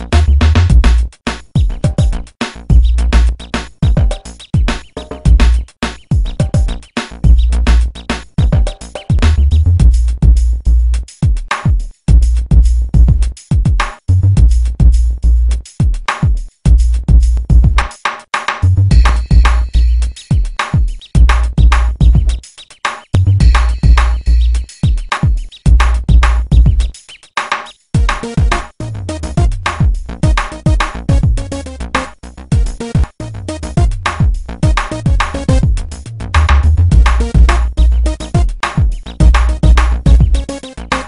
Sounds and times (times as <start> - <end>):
Drum machine: 0.0 - 41.0
Sampler: 23.4 - 26.9, 28.0 - 35.8, 36.4 - 41.0.